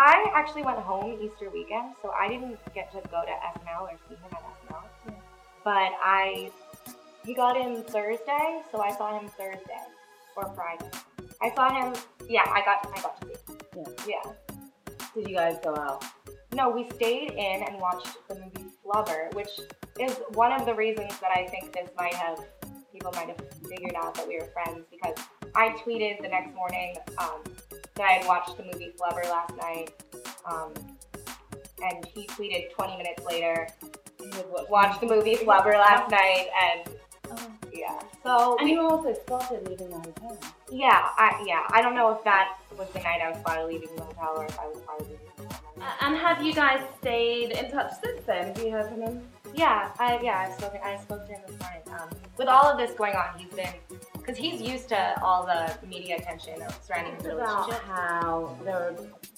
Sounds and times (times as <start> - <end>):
Speech: 0.0 - 4.9, 5.7 - 6.5, 7.3 - 10.8, 11.4 - 13.2, 13.8 - 14.4, 15.2 - 16.0, 16.6 - 22.4, 23.0 - 27.4, 28.0 - 29.9, 30.5 - 30.8, 31.8 - 45.2, 45.8 - 59.2
Music: 0.0 - 59.3.